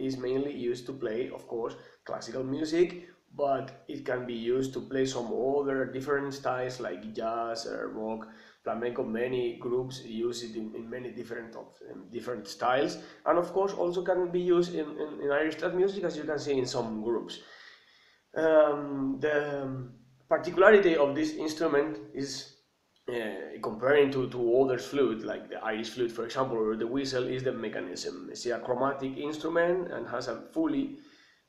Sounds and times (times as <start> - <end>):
Speech: 0.0 - 17.6, 18.4 - 31.0.